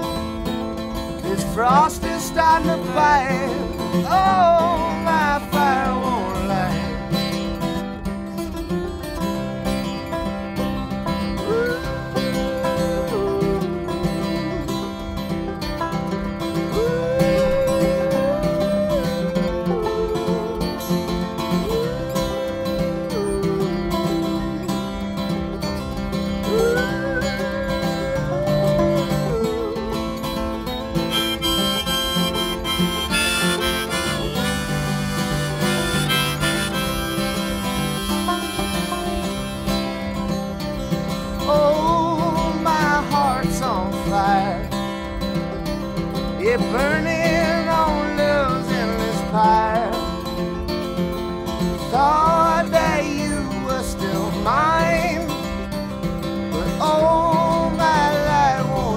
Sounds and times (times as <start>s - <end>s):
Harmonica: 0.0s - 58.9s.